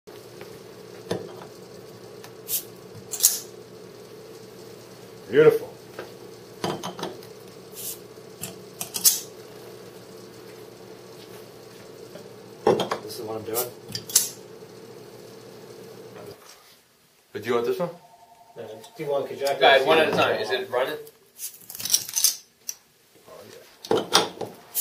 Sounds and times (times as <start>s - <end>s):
Speech: 5.3s - 5.8s, 13.0s - 13.8s, 18.6s - 21.1s, 23.2s - 23.7s.